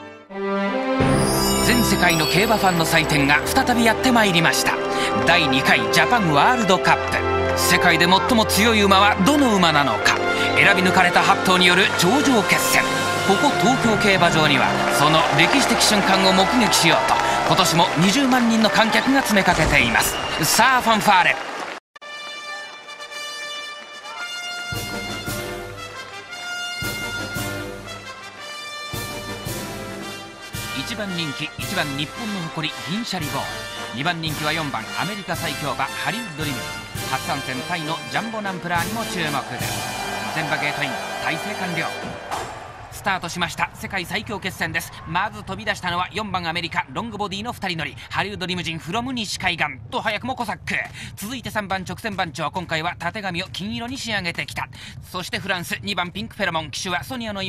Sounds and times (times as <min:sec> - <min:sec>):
Music: 0:00.0 - 0:21.3, 0:22.0 - 0:57.4
Speech: 0:01.6 - 0:21.4, 0:30.8 - 0:39.7, 0:40.3 - 0:42.2, 0:43.0 - 0:57.4.